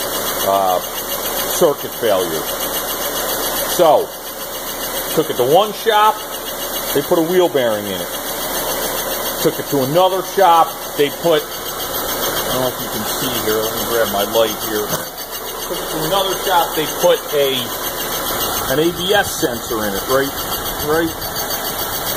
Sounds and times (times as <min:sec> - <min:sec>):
Speech: 0:00.4 - 0:00.9, 0:01.6 - 0:02.5, 0:03.8 - 0:04.2, 0:05.1 - 0:06.2, 0:07.0 - 0:08.2, 0:09.4 - 0:11.5, 0:12.5 - 0:15.1, 0:15.7 - 0:17.8, 0:18.7 - 0:21.2.